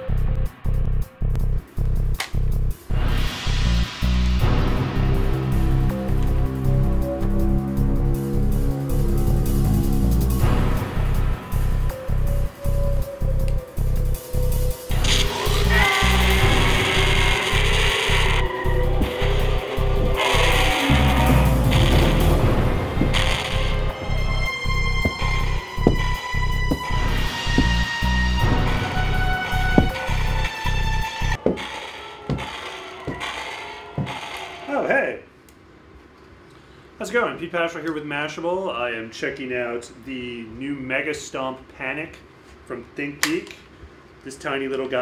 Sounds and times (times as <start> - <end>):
Music: 0.0 - 31.4
Speech: 34.7 - 35.3, 37.0 - 43.6, 44.2 - 45.0.